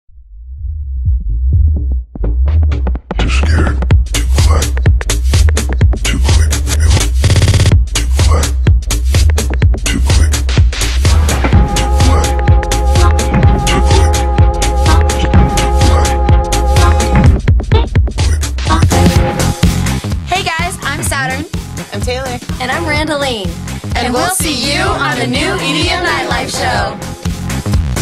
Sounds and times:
Electronic dance music: 6.3s - 7.8s, 9.0s - 28.0s.

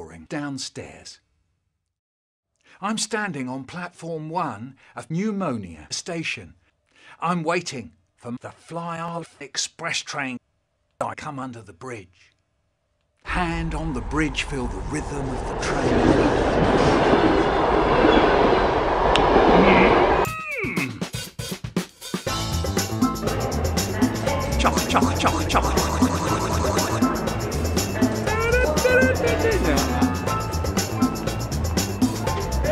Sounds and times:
Train: 14.7s - 20.2s
Subway, metro, underground: 14.8s - 20.2s
Railroad car, train wagon: 15.2s - 20.2s.

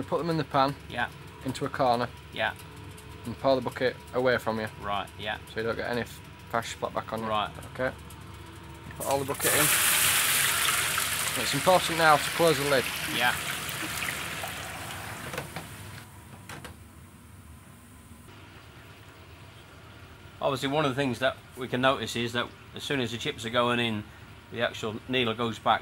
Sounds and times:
Speech: 0.0s - 2.6s, 3.3s - 8.0s, 9.0s - 9.7s, 11.4s - 13.4s, 20.4s - 25.8s
Frying (food): 9.0s - 16.0s, 18.3s - 20.1s.

